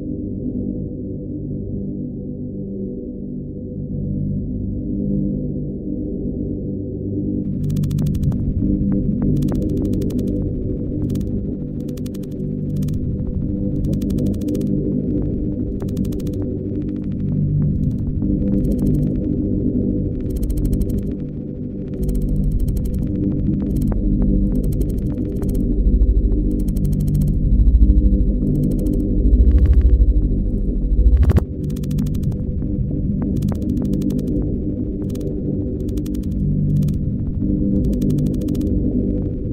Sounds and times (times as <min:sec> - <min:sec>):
Sonar: 0:23.6 - 0:31.3.